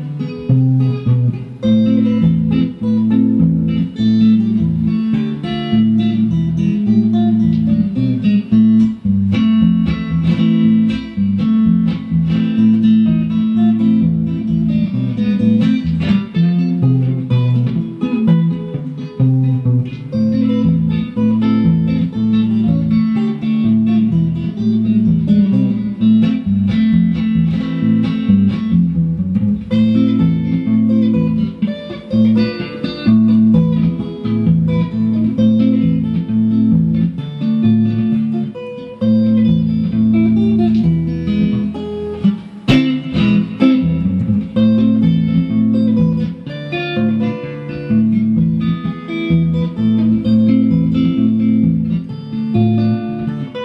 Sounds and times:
Acoustic guitar: 0.0s - 53.6s.

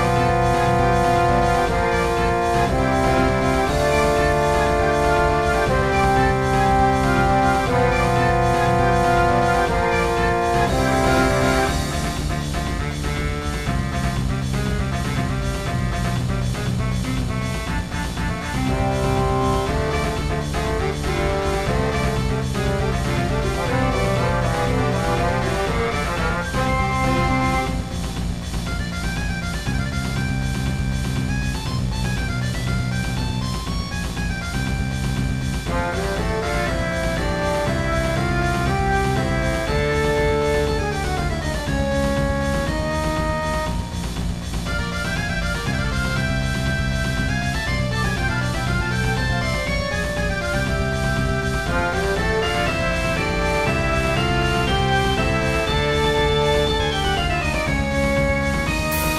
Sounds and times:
Music: 0.0s - 59.1s.

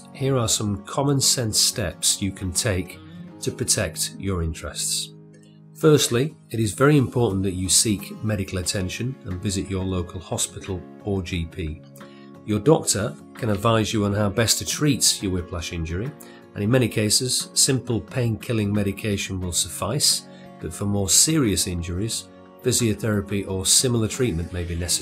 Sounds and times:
Speech: 0.0s - 5.1s, 5.8s - 11.9s, 12.5s - 25.0s
Music: 0.0s - 25.0s.

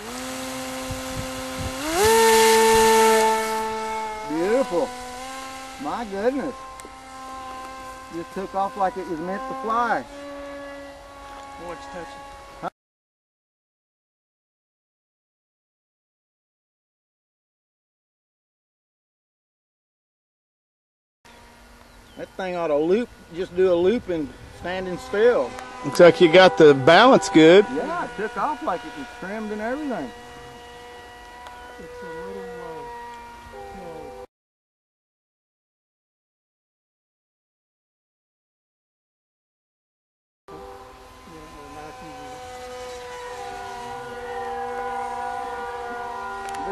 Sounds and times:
Speech: 4.3s - 4.9s, 5.8s - 6.6s, 22.2s - 30.1s, 31.8s - 32.9s, 41.3s - 42.3s.

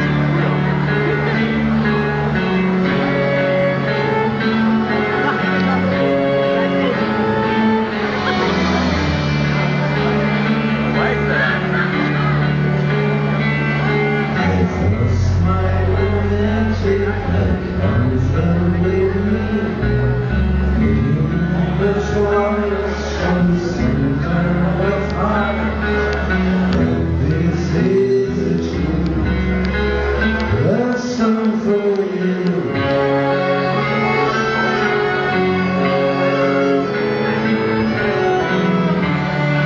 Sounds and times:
Music: 0.0s - 39.6s.

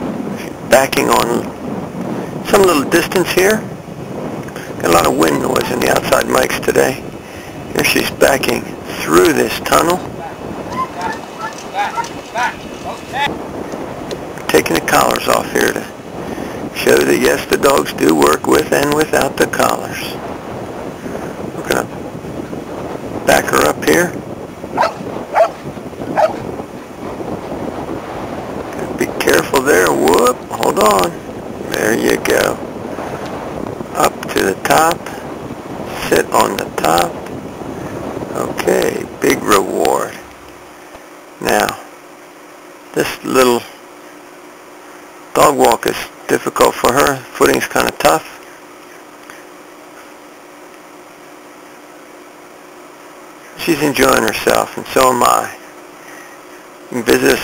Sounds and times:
Speech: 0.7s - 1.5s, 2.5s - 3.6s, 4.8s - 7.0s, 7.8s - 13.3s, 14.5s - 15.9s, 16.8s - 20.2s, 21.6s - 21.9s, 23.3s - 24.2s, 28.8s - 32.6s, 34.0s - 35.1s, 36.0s - 37.2s, 38.4s - 40.2s, 41.4s - 41.9s, 43.0s - 43.8s, 45.4s - 48.4s, 53.6s - 55.6s, 56.9s - 57.4s
Bow-wow: 24.8s - 25.6s, 26.2s - 26.4s.

